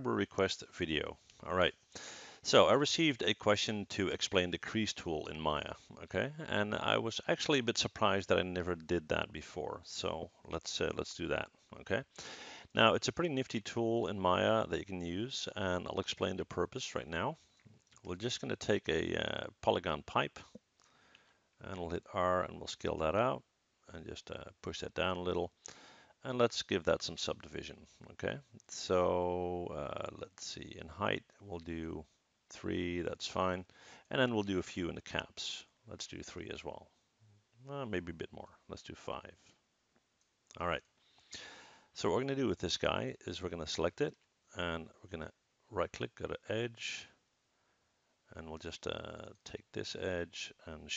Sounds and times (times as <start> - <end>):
Speech: 0.0 - 1.8, 2.4 - 17.4, 18.0 - 20.6, 21.6 - 25.6, 26.2 - 37.0, 37.6 - 39.4, 40.5 - 40.8, 42.0 - 47.2, 48.3 - 50.9
Inside, small room: 0.0 - 50.9.